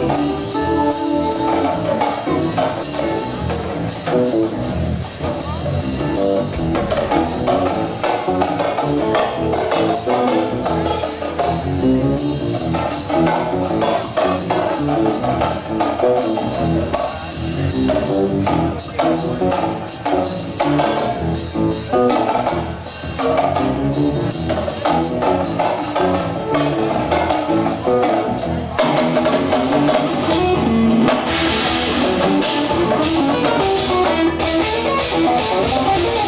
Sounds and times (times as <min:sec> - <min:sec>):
Drum: 0:00.0 - 0:36.2
Drum kit: 0:00.0 - 0:36.2.